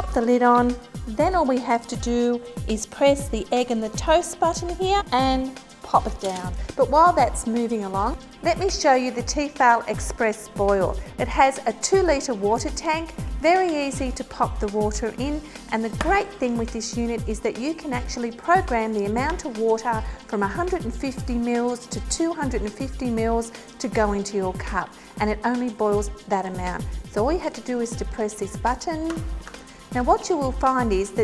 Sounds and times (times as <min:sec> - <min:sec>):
Speech: 0:00.0 - 0:29.2, 0:30.0 - 0:31.2
Music: 0:00.0 - 0:31.2.